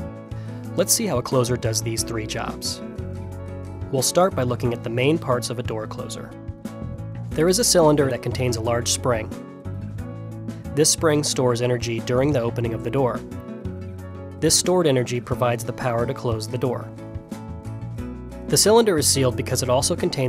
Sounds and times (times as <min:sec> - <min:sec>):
Music: 0:00.0 - 0:20.2
Speech: 0:00.8 - 0:02.8, 0:03.9 - 0:06.4, 0:07.4 - 0:09.3, 0:10.8 - 0:13.2, 0:14.4 - 0:16.9, 0:18.5 - 0:20.2.